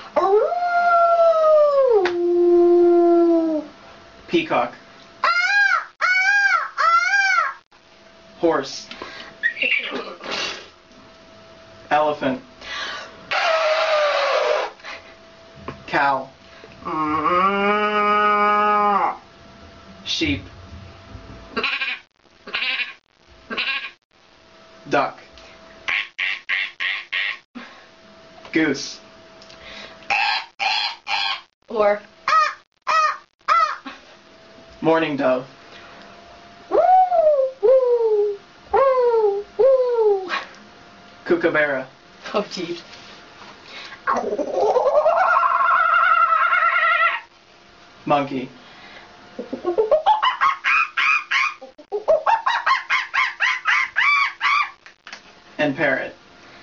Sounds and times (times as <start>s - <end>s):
Inside, small room: 0.0s - 56.6s
Speech: 4.3s - 4.8s, 20.0s - 20.5s, 41.3s - 42.8s, 48.1s - 48.6s, 55.6s - 56.2s.